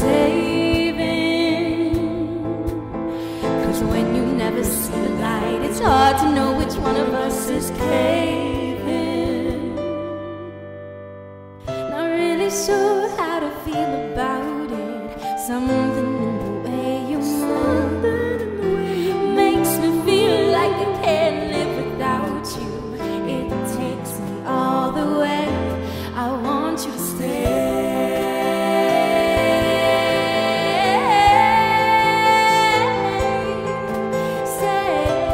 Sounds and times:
Music: 0:00.0 - 0:35.3.

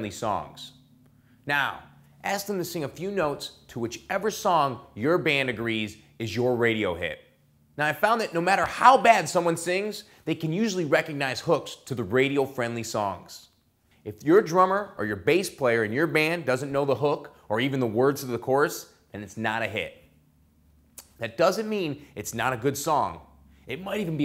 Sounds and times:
Speech: 0:00.0 - 0:00.8, 0:01.5 - 0:20.1, 0:21.0 - 0:24.2.

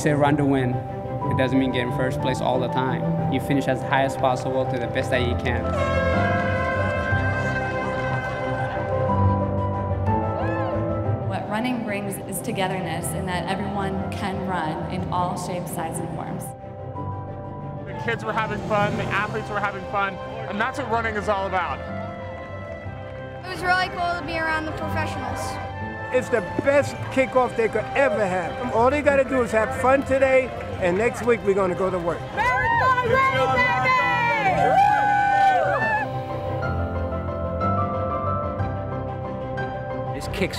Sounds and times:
Music: 0:00.0 - 0:40.5.

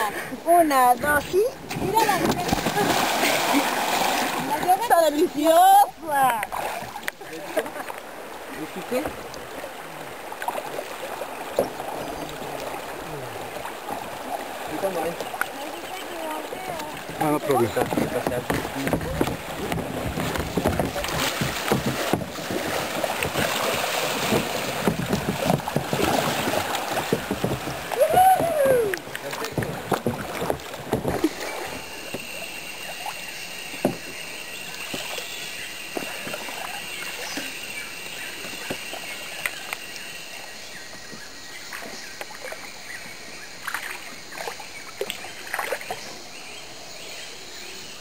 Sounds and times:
Rowboat, canoe, kayak: 0:00.0 - 0:48.0
Splash, splatter: 0:01.7 - 0:04.6, 0:06.4 - 0:07.1, 0:16.9 - 0:28.2, 0:43.6 - 0:46.0.

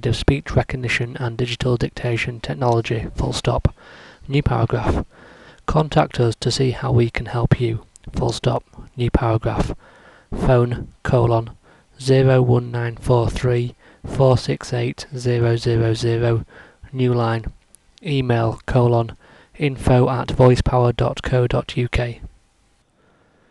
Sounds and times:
Male speech, man speaking: 0:00.0 - 0:03.7, 0:04.3 - 0:05.0, 0:05.7 - 0:09.8, 0:10.4 - 0:22.3
Narration, monologue: 0:00.0 - 0:23.5.

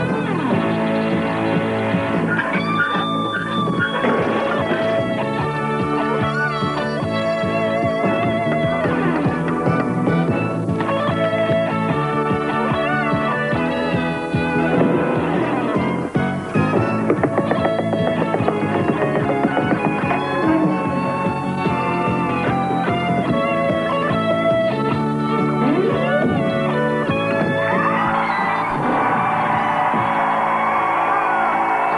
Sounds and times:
Music: 0:00.0 - 0:31.9.

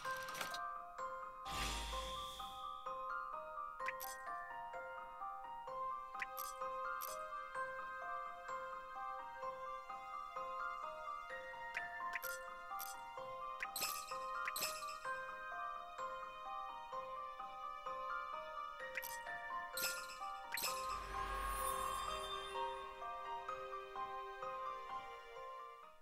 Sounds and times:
Music: 0:00.0 - 0:26.0.

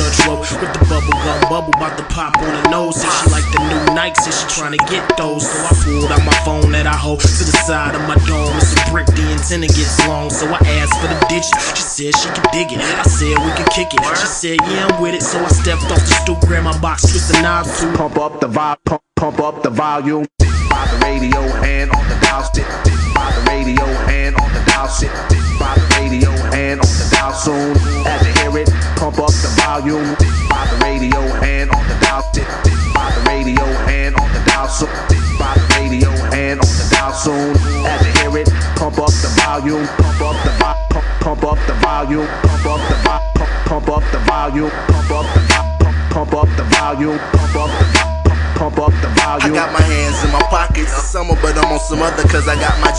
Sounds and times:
Music: 0:00.0 - 0:18.8, 0:20.4 - 0:52.9.

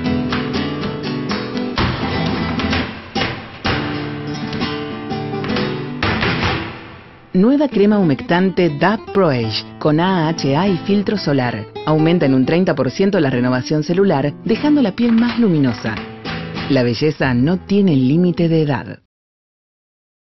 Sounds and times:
Music: 0:00.0 - 0:19.0
Speech: 0:07.4 - 0:16.0, 0:16.7 - 0:19.1.

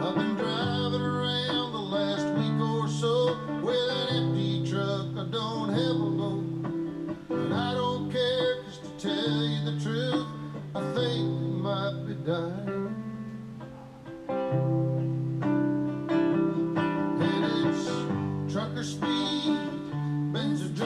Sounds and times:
Music: 0:00.0 - 0:20.8.

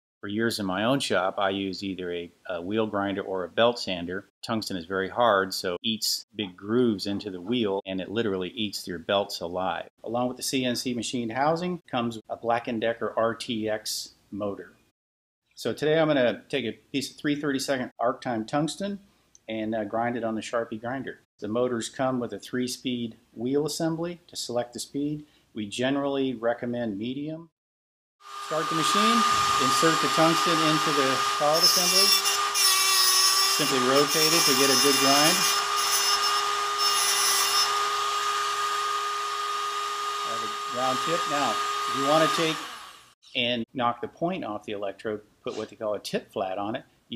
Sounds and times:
Speech: 0:00.2 - 0:14.8, 0:15.6 - 0:27.5, 0:28.5 - 0:32.2, 0:33.6 - 0:35.5, 0:40.3 - 0:42.6, 0:43.3 - 0:47.1.

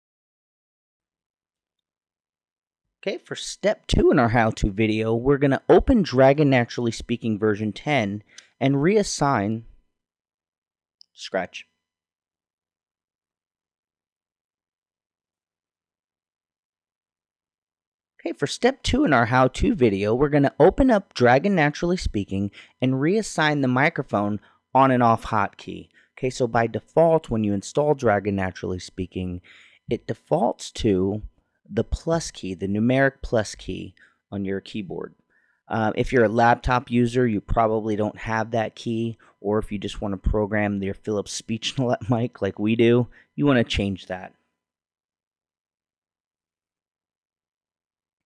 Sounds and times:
Narration, monologue: 0:03.0 - 0:09.9, 0:11.0 - 0:11.8, 0:18.2 - 0:44.8.

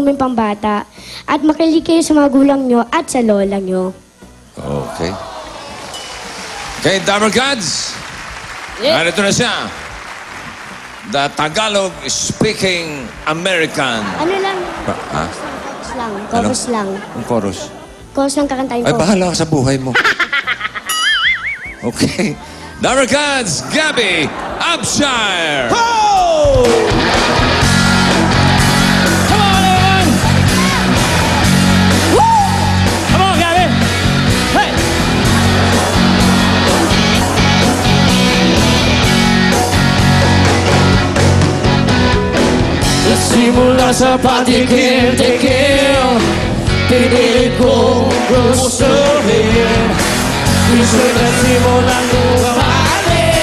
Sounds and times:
Music: 0:00.0 - 0:53.4
Singing: 0:43.0 - 0:53.4.

